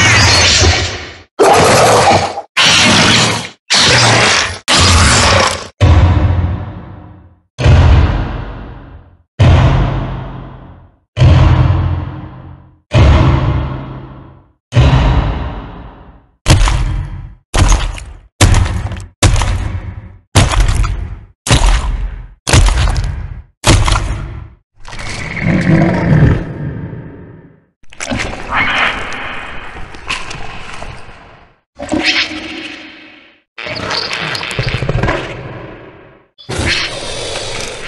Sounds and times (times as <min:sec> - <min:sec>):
Sound effect: 0:00.0 - 0:37.8.